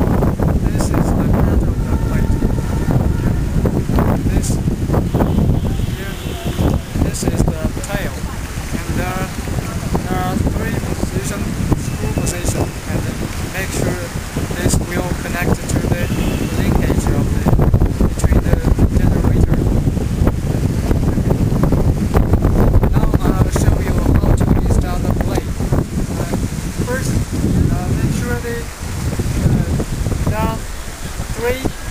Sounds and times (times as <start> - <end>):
Rustling leaves: 0.0 - 31.9
Wind noise (microphone): 0.0 - 31.9
Speech: 0.7 - 2.4, 4.3 - 4.6, 5.9 - 8.2, 8.8 - 9.4, 10.0 - 17.6, 18.2 - 19.6, 22.9 - 25.5, 26.2 - 28.7, 30.3 - 30.6, 31.3 - 31.8.